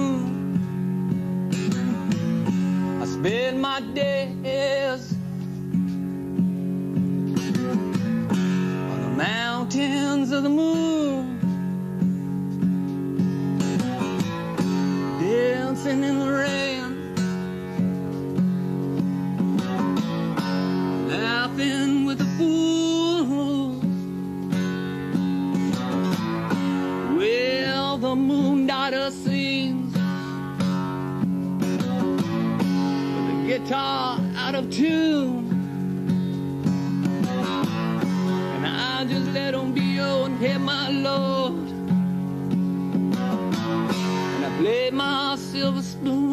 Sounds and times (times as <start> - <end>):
Strum: 0.0 - 46.3.